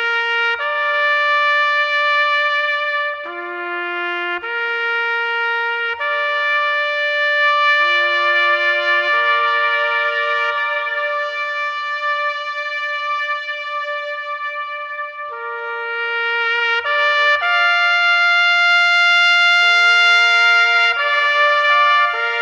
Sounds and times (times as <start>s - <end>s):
Music: 0.0s - 22.4s
Echo: 5.7s - 22.4s.